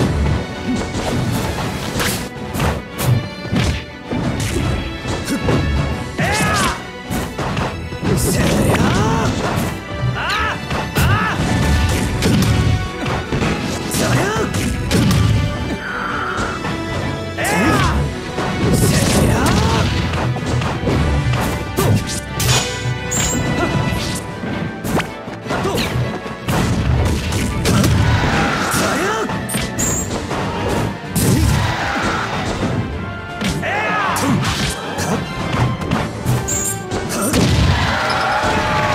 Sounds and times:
Music: 0.0s - 38.9s
Speech: 8.2s - 9.3s, 14.0s - 14.5s, 18.8s - 19.8s, 28.7s - 29.3s.

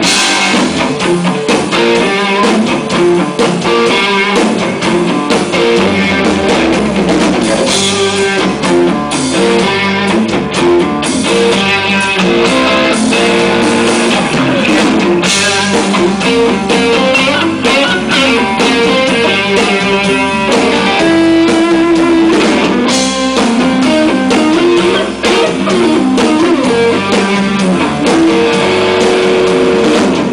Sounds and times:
Electric guitar: 0.0s - 30.3s.

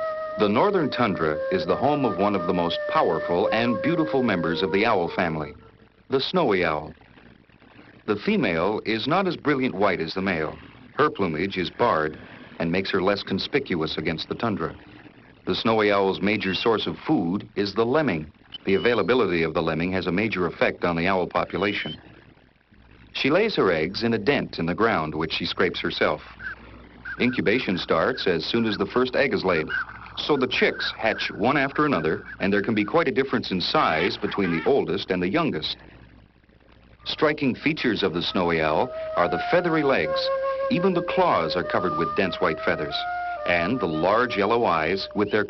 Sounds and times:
Speech: 0.4s - 7.0s, 8.1s - 14.8s, 15.5s - 22.0s, 23.2s - 26.4s, 27.2s - 35.8s, 37.1s - 45.4s
Bird: 18.5s - 19.3s, 26.3s - 33.2s.

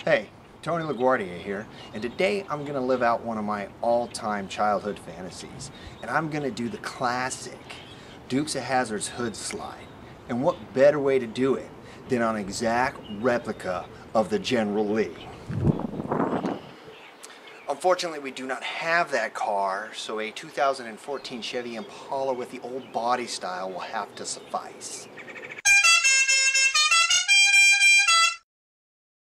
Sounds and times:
Speech: 0.0s - 15.2s, 17.7s - 25.1s
Outside, rural or natural: 0.0s - 28.4s
Music: 25.6s - 28.4s.

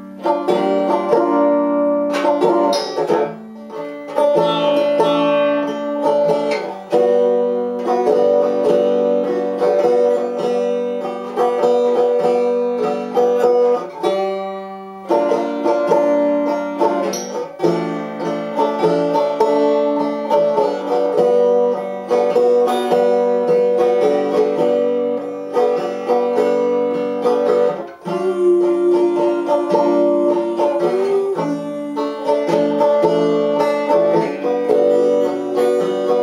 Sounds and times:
Banjo: 0.0s - 36.2s.

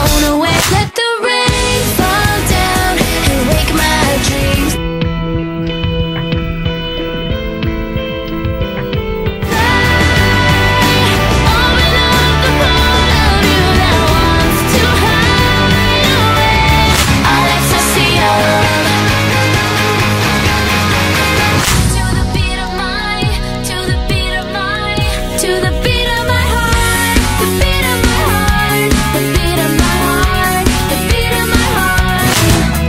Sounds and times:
Dance music: 0.0s - 32.8s
Pop music: 0.0s - 32.8s.

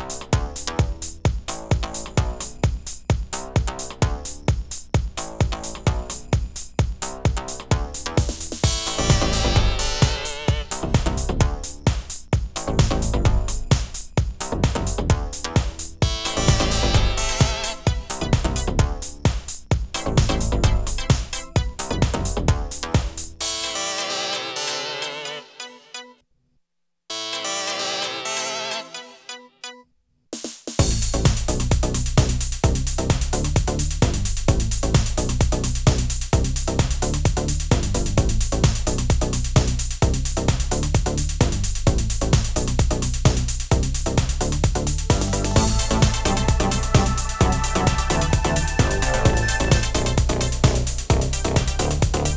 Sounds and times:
Musical instrument: 27.1s - 29.8s, 45.2s - 50.8s.

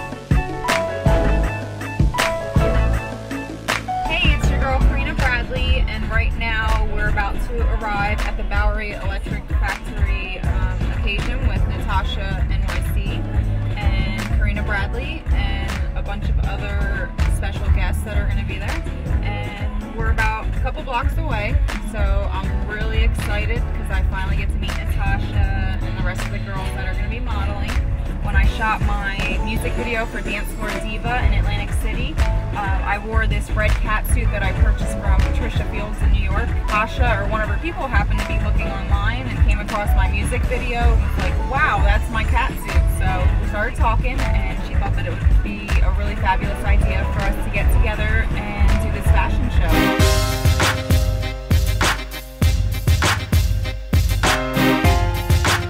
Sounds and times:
Music: 0.0s - 55.7s
Speech: 4.1s - 50.0s.

